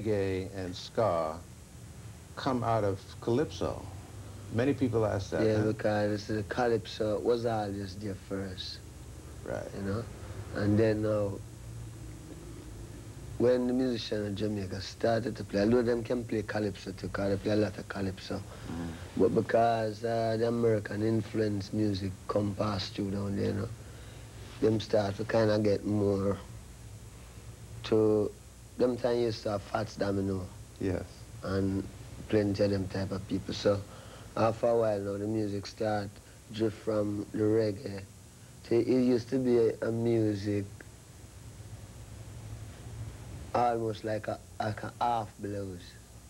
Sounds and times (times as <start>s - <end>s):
Speech: 0.0s - 1.4s, 2.4s - 3.9s, 4.5s - 8.8s, 9.4s - 11.4s, 13.4s - 23.8s, 24.6s - 26.5s, 27.8s - 40.8s, 43.5s - 46.0s.